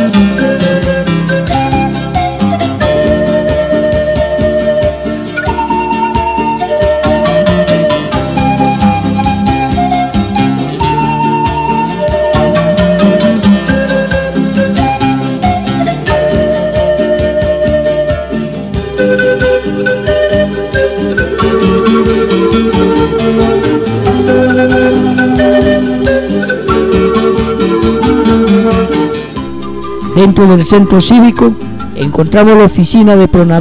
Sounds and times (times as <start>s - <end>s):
Music: 0.0s - 33.6s.